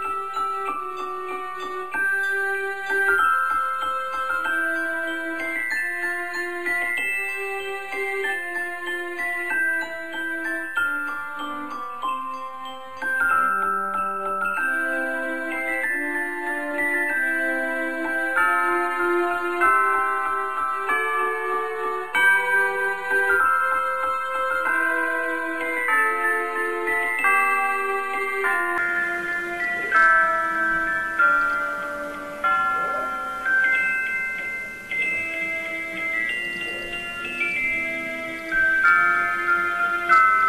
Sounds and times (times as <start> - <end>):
Jingle (music): 0.0 - 40.4.